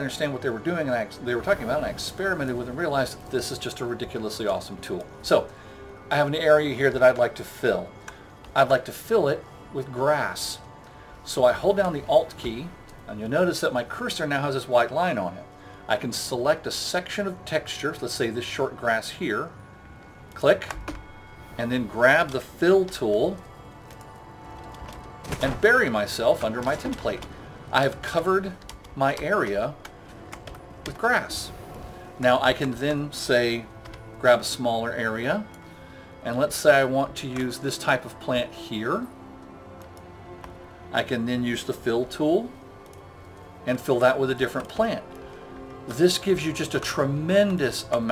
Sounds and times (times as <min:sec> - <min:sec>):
Speech: 0:00.0 - 0:05.5, 0:06.1 - 0:07.9, 0:08.6 - 0:10.6, 0:11.3 - 0:19.5, 0:20.4 - 0:20.8, 0:21.6 - 0:23.4, 0:25.4 - 0:29.8, 0:30.9 - 0:31.5, 0:32.2 - 0:35.5, 0:36.2 - 0:39.1, 0:41.0 - 0:42.5, 0:43.7 - 0:45.1, 0:45.9 - 0:48.1
Music: 0:00.0 - 0:48.1.